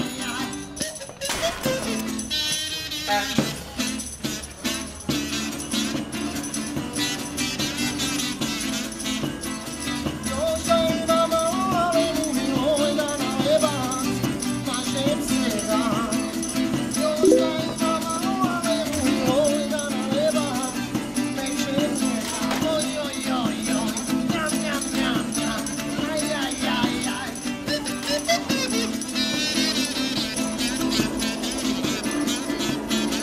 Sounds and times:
Music: 0:00.0 - 0:33.2.

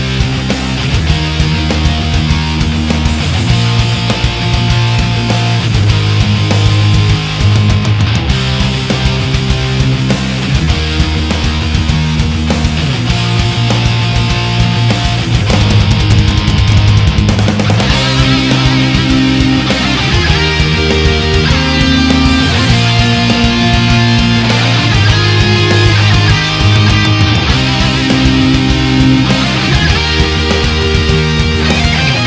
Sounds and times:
Electric guitar: 0:00.0 - 0:32.2.

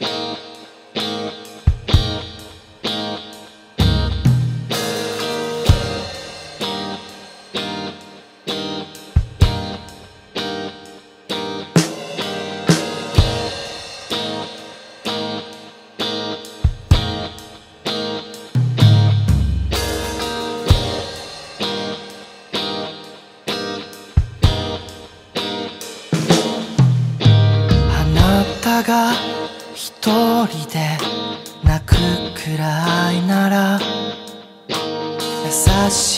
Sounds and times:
Music: 0:00.0 - 0:36.1.

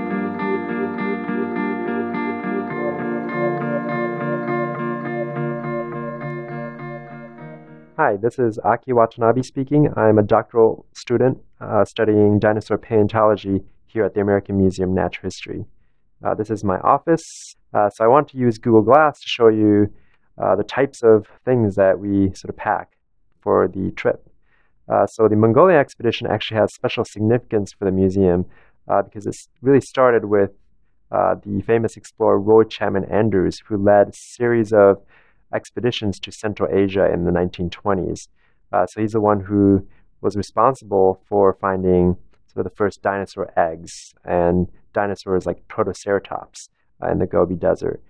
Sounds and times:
Speech: 0:08.0 - 0:24.2, 0:24.9 - 0:48.0.

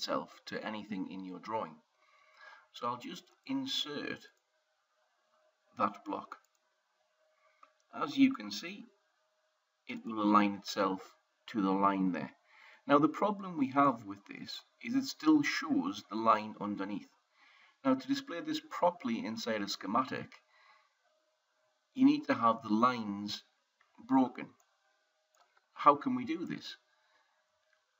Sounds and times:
Speech: 0:00.0 - 0:01.8, 0:02.7 - 0:04.4, 0:05.8 - 0:06.4, 0:08.0 - 0:08.9, 0:09.9 - 0:17.1, 0:17.9 - 0:20.4, 0:22.0 - 0:23.5, 0:24.1 - 0:24.6, 0:25.8 - 0:26.8.

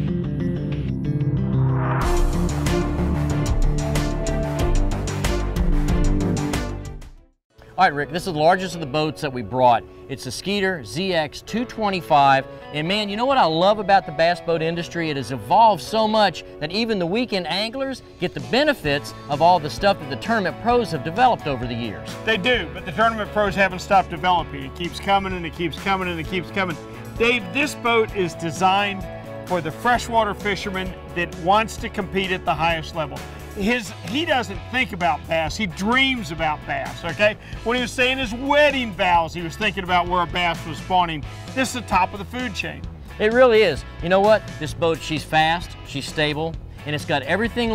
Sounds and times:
Music: 0:00.0 - 0:47.7
Speech: 0:07.8 - 0:47.7.

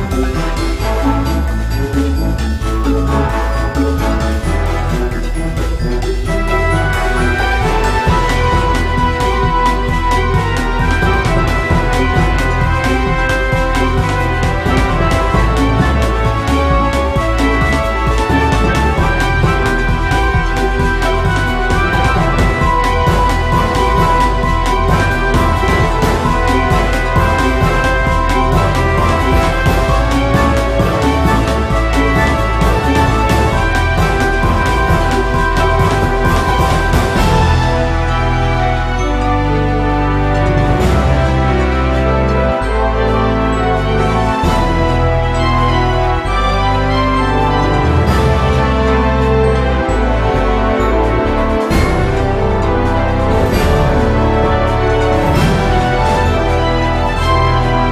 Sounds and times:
Soundtrack music: 0:00.0 - 0:57.9
Theme music: 0:00.0 - 0:57.9
Video game music: 0:00.0 - 0:57.9.

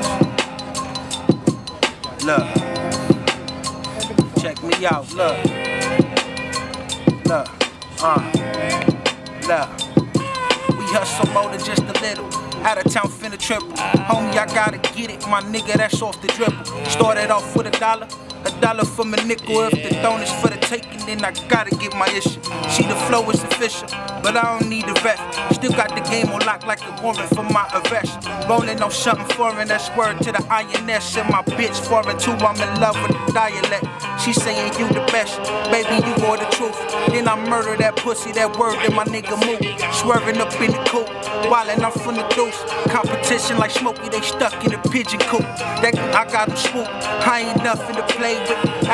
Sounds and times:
Music: 0:00.0 - 0:48.9.

